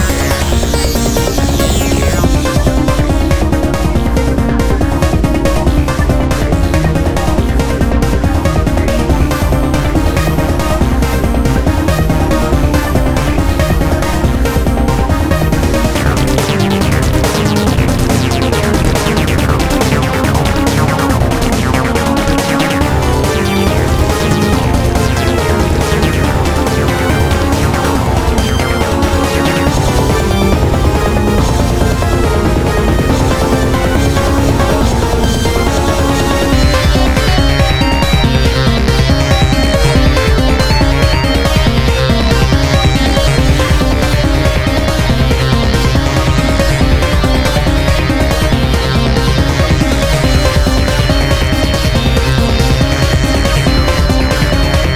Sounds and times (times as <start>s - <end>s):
Trance music: 0.0s - 54.9s.